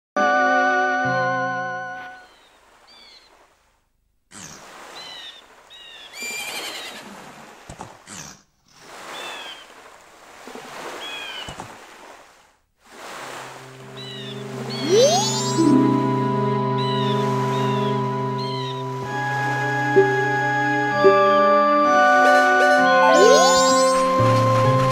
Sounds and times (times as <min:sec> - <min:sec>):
Bird vocalization, bird call, bird song: 0:02.2 - 0:03.3, 0:14.0 - 0:15.7, 0:16.8 - 0:18.9.